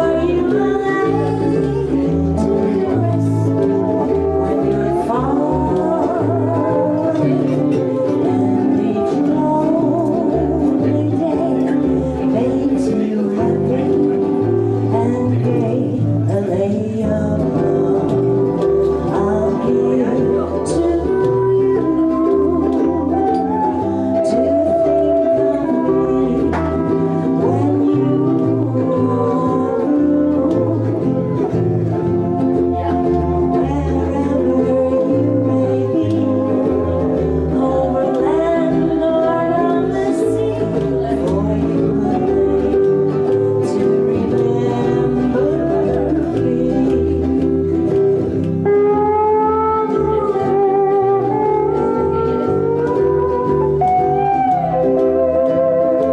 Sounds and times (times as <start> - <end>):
Music: 0.0 - 56.1.